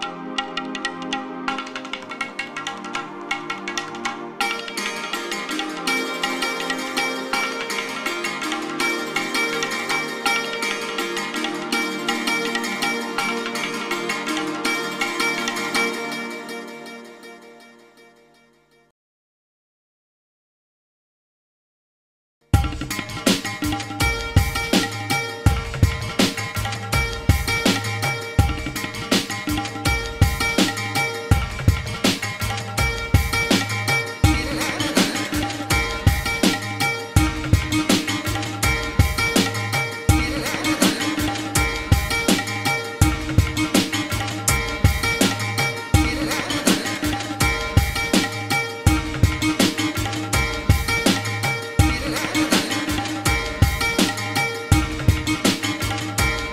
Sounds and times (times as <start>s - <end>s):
Music: 0.0s - 18.9s, 22.4s - 56.5s.